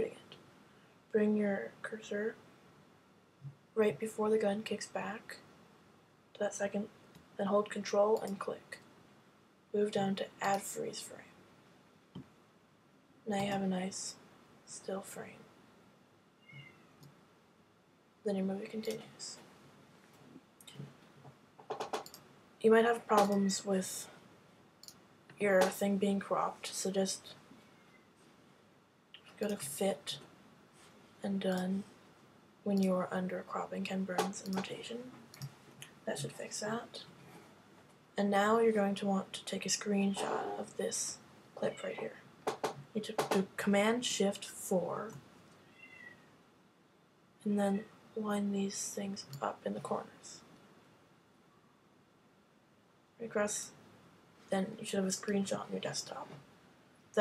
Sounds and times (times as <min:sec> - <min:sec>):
Speech: 0:00.0 - 0:00.4, 0:01.2 - 0:02.4, 0:03.8 - 0:05.4, 0:06.4 - 0:08.8, 0:09.8 - 0:11.3, 0:13.3 - 0:15.4, 0:18.3 - 0:19.4, 0:22.6 - 0:24.2, 0:25.4 - 0:27.4, 0:29.3 - 0:30.2, 0:31.2 - 0:31.9, 0:32.7 - 0:35.1, 0:36.0 - 0:37.1, 0:38.2 - 0:42.2, 0:43.0 - 0:45.2, 0:47.4 - 0:50.4, 0:53.2 - 0:53.8, 0:54.5 - 0:56.4.